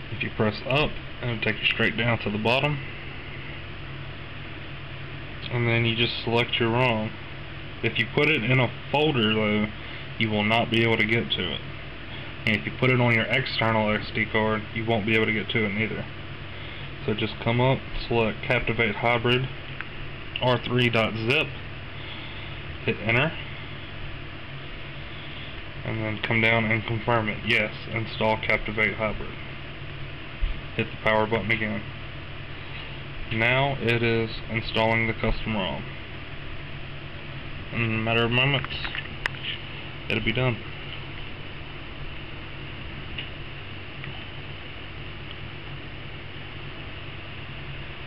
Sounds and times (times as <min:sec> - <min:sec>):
Speech: 0:00.1 - 0:02.8, 0:05.4 - 0:07.2, 0:07.8 - 0:11.6, 0:12.5 - 0:16.1, 0:17.0 - 0:19.6, 0:20.4 - 0:21.6, 0:22.8 - 0:23.4, 0:25.8 - 0:29.4, 0:30.8 - 0:31.9, 0:33.3 - 0:35.9, 0:37.7 - 0:39.0, 0:40.1 - 0:40.7.